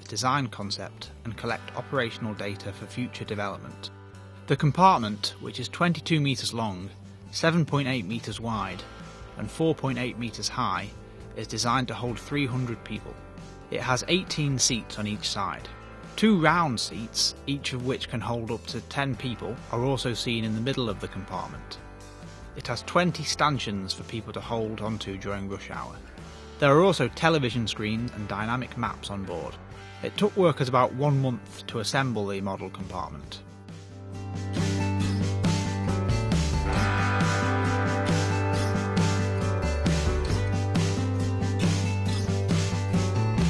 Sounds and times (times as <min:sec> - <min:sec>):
Speech: 0:00.0 - 0:03.9, 0:04.5 - 0:21.8, 0:22.6 - 0:26.0, 0:26.6 - 0:33.4
Music: 0:00.0 - 0:43.4.